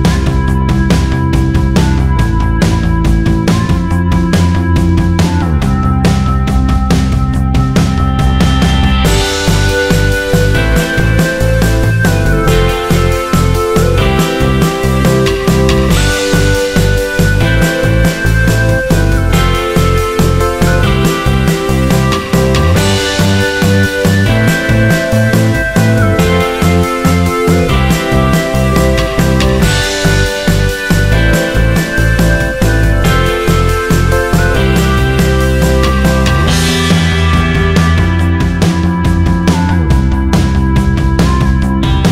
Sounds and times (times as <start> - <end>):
Music: 0.0 - 42.1.